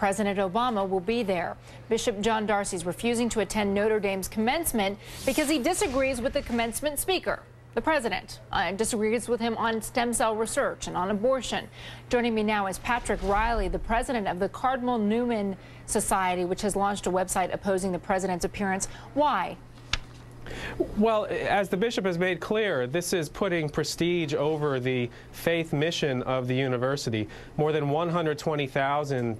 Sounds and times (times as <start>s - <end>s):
Female speech, woman speaking: 0.0s - 19.6s
Conversation: 0.0s - 29.3s
Male speech, man speaking: 21.0s - 29.3s.